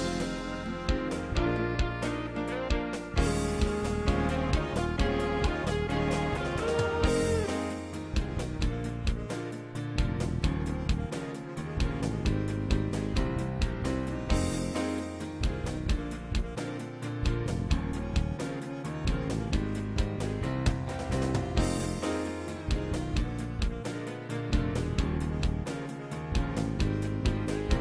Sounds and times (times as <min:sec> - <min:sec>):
Rhythm and blues: 0:00.0 - 0:27.8.